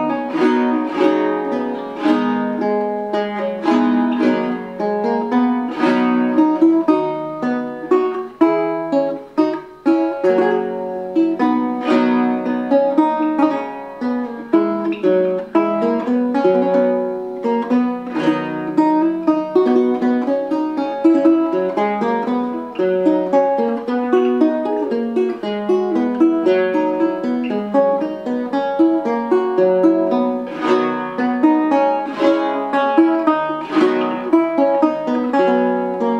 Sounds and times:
Strum: 0:00.0 - 0:36.1.

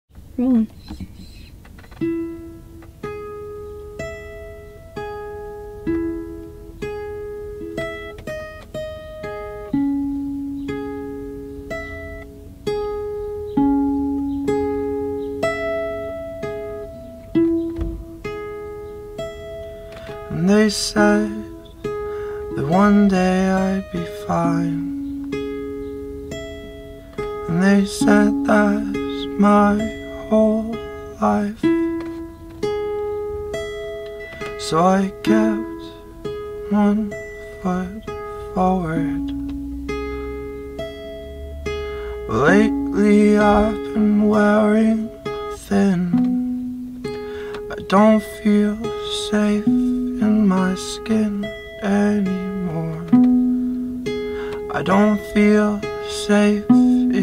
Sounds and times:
Speech: 0:00.4 - 0:01.4
Music: 0:01.8 - 0:57.2.

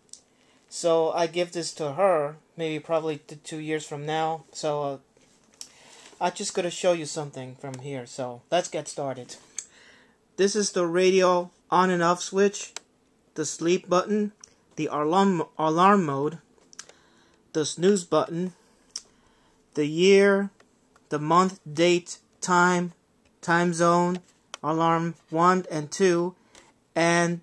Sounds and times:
Speech: 0:00.7 - 0:05.1, 0:06.2 - 0:09.6, 0:10.4 - 0:12.8, 0:13.4 - 0:16.5, 0:17.5 - 0:18.6, 0:19.8 - 0:26.4, 0:27.0 - 0:27.4.

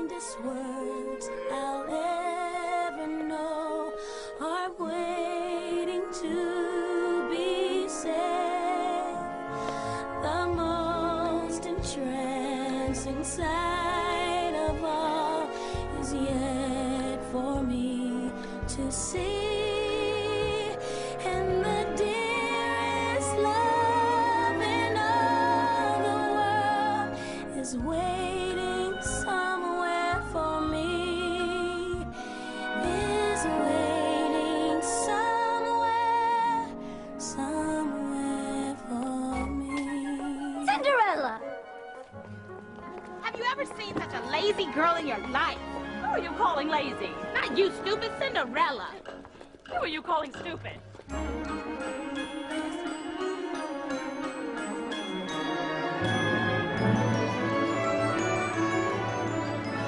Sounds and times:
Music: 0:00.0 - 0:59.8.

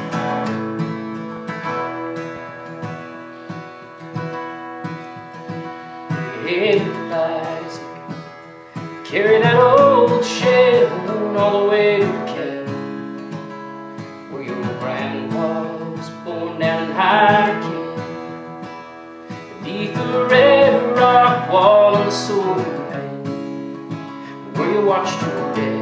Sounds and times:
Music: 0:00.0 - 0:25.8
Male singing: 0:06.3 - 0:08.0, 0:09.0 - 0:12.9, 0:14.3 - 0:18.2, 0:19.6 - 0:23.2, 0:24.5 - 0:25.8.

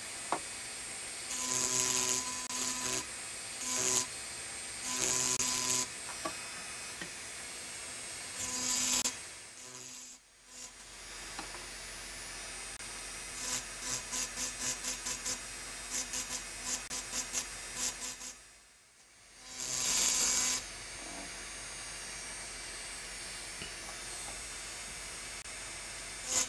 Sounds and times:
Electric shaver, electric razor: 0:00.0 - 0:26.4.

